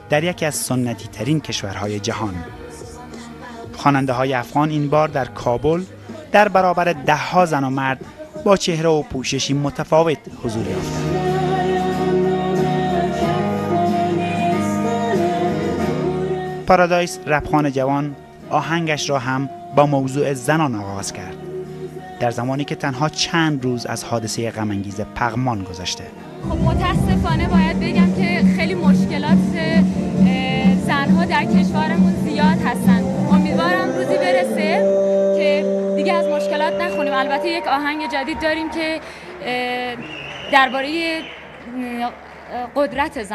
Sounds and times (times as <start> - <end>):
Music: 0.0 - 43.3
Speech: 3.8 - 10.8, 22.2 - 34.8.